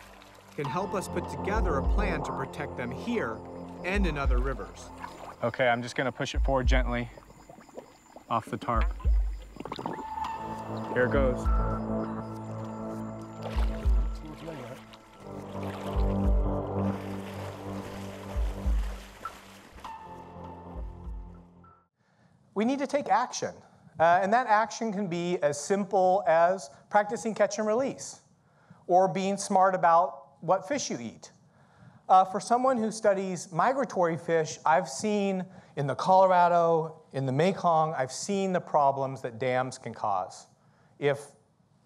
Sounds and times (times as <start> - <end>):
Music: 0.0 - 5.5, 6.4 - 7.1, 8.8 - 21.9
Outside, rural or natural: 0.0 - 22.0
Speech: 0.6 - 7.2, 8.3 - 8.9, 11.0 - 11.5, 14.2 - 14.8, 22.6 - 28.3, 28.9 - 31.4, 32.1 - 41.4.